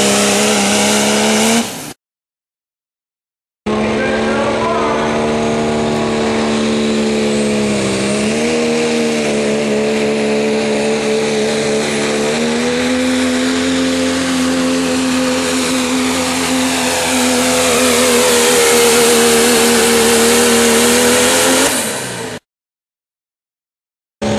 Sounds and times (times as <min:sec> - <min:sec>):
Truck: 0:00.0 - 0:02.0, 0:03.7 - 0:22.5.